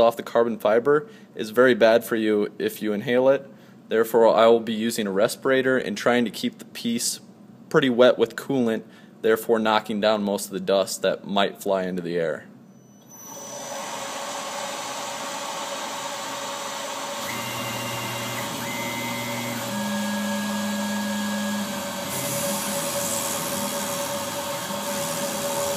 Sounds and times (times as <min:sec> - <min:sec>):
Speech: 0:00.0 - 0:12.5.